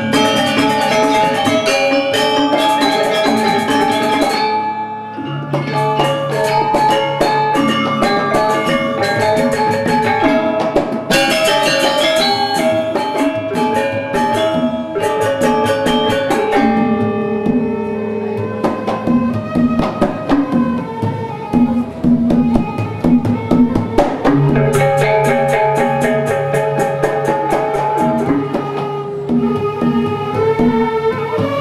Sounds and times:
Steelpan: 0.0 - 31.6.

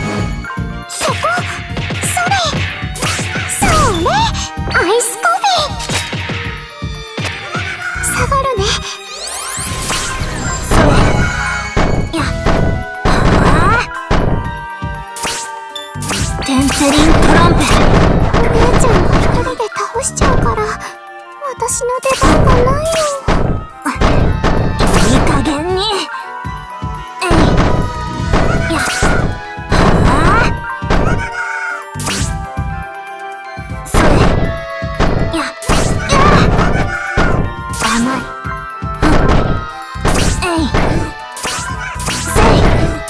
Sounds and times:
Music: 0.0 - 43.0
Smash, crash: 16.0 - 19.5, 22.2 - 25.4, 33.9 - 38.1, 39.0 - 43.0
Speech: 16.4 - 17.8, 18.4 - 23.2, 24.9 - 26.1, 27.2 - 27.6, 28.6 - 29.0, 30.0 - 30.5, 40.4 - 41.1.

